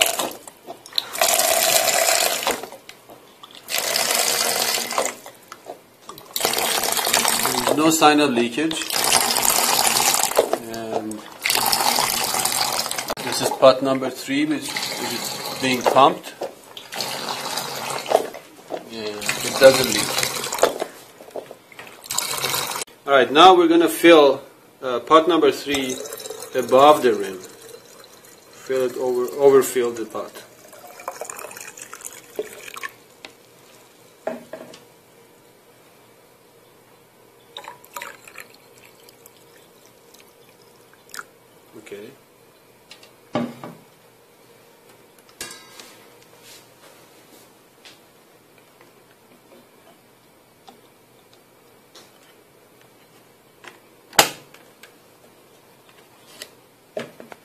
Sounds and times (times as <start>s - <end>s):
Speech: 7.4s - 8.9s, 10.6s - 11.3s, 13.2s - 16.4s, 18.8s - 20.2s, 23.0s - 27.5s, 28.6s - 30.5s, 41.7s - 42.2s.